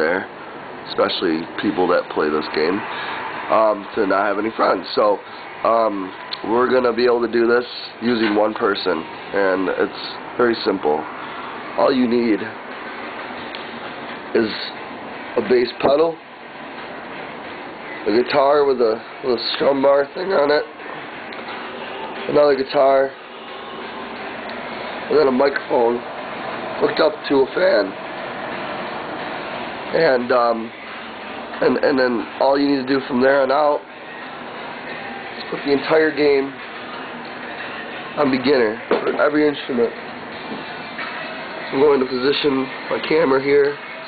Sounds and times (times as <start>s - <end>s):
Speech: 0.0s - 0.3s, 0.9s - 2.9s, 3.5s - 11.0s, 11.8s - 12.6s, 14.3s - 14.8s, 15.4s - 16.2s, 18.0s - 20.7s, 22.3s - 23.2s, 25.1s - 26.0s, 26.8s - 28.0s, 29.9s - 30.7s, 31.6s - 33.8s, 35.4s - 36.6s, 38.2s - 40.0s, 41.7s - 43.8s.